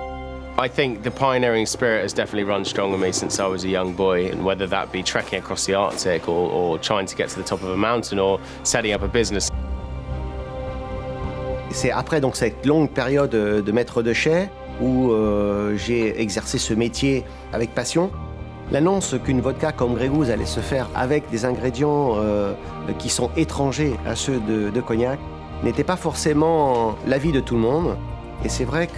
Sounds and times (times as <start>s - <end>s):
Music: 0.0s - 28.9s
Speech: 0.6s - 9.5s, 11.7s - 28.9s.